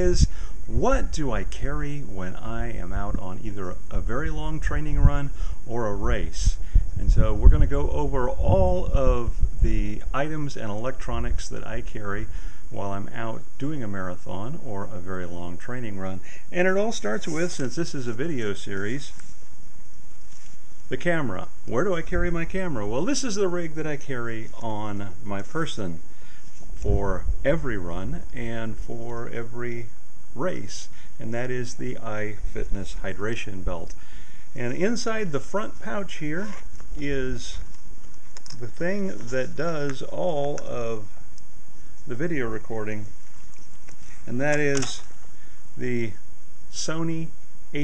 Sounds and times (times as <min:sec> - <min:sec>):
Speech: 0:00.0 - 0:19.2, 0:20.9 - 0:26.1, 0:26.8 - 0:34.0, 0:34.6 - 0:37.7, 0:38.6 - 0:41.2, 0:42.1 - 0:43.1, 0:44.3 - 0:45.1, 0:45.8 - 0:47.8
Outside, rural or natural: 0:00.0 - 0:47.8.